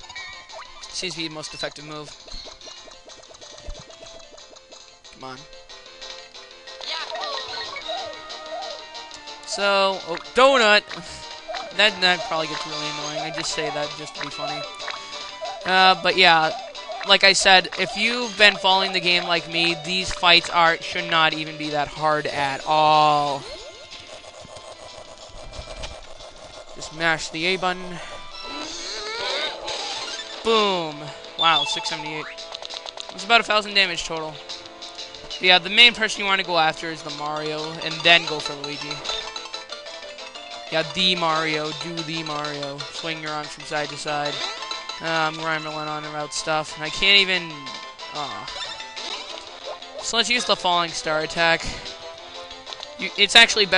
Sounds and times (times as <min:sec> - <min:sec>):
Music: 0:00.0 - 0:53.7
Speech: 0:00.9 - 0:02.1, 0:09.5 - 0:11.0, 0:11.8 - 0:14.7, 0:15.7 - 0:23.4, 0:26.8 - 0:28.0, 0:30.5 - 0:32.3, 0:33.2 - 0:34.4, 0:35.4 - 0:39.0, 0:40.8 - 0:48.5, 0:50.0 - 0:51.8, 0:53.0 - 0:53.7.